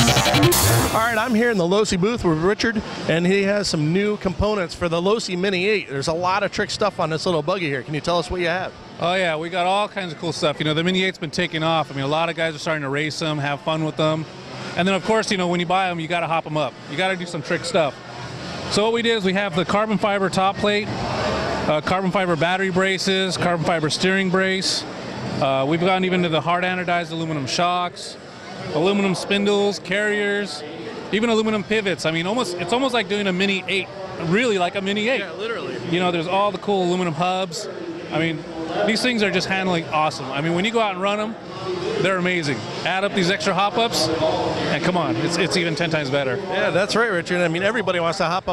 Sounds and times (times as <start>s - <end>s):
Speech: 0.9s - 18.0s, 18.7s - 20.9s, 21.7s - 48.5s.